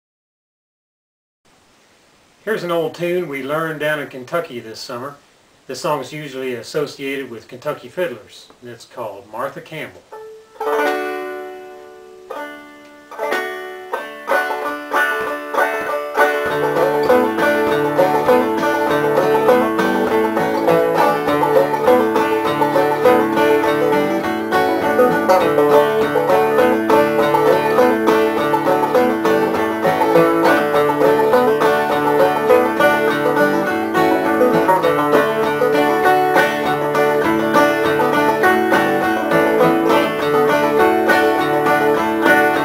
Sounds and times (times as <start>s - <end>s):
Music: 10.1s - 42.6s.